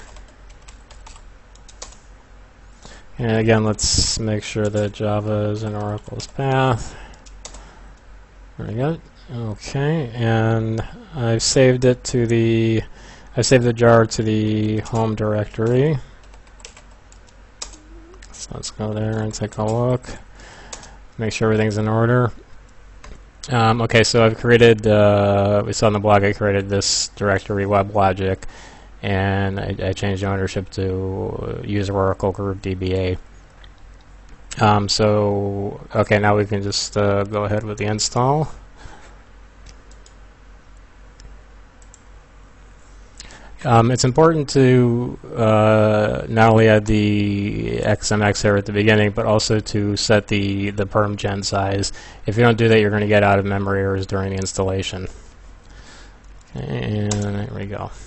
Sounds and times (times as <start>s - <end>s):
Computer keyboard: 0.0s - 2.0s, 7.1s - 7.6s, 14.9s - 17.9s, 39.7s - 40.2s
Speech: 3.2s - 7.0s, 8.6s - 16.1s, 17.9s - 20.3s, 21.2s - 22.4s, 23.4s - 33.2s, 34.5s - 38.6s, 43.6s - 55.2s, 56.5s - 58.0s.